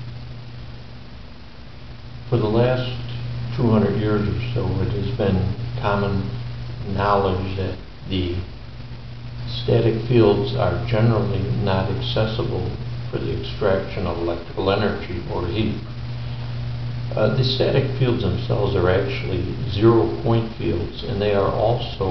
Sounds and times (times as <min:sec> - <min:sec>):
Speech: 0:02.3 - 0:08.5, 0:09.5 - 0:15.9, 0:17.1 - 0:22.1.